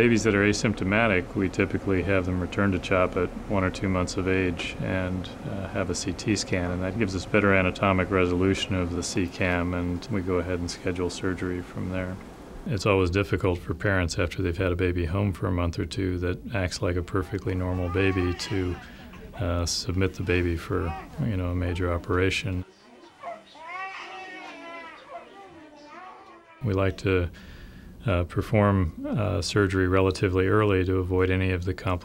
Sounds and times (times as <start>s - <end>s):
Speech: 0.0s - 22.7s, 24.4s - 27.4s, 28.0s - 32.0s.